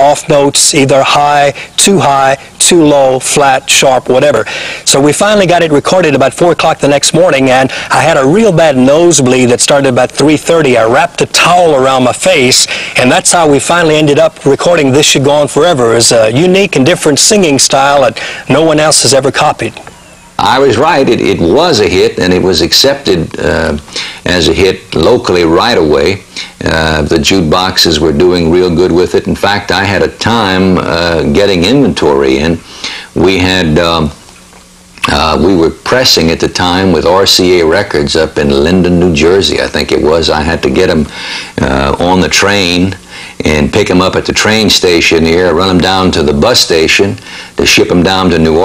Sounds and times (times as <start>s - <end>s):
Speech: 0.0s - 32.6s, 33.2s - 34.2s, 35.0s - 48.6s.